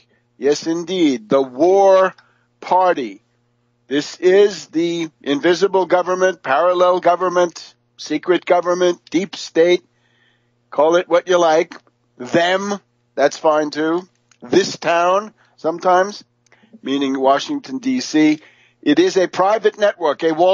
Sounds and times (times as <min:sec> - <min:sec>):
Speech: 0:00.4 - 0:03.2, 0:03.9 - 0:09.9, 0:10.8 - 0:20.5.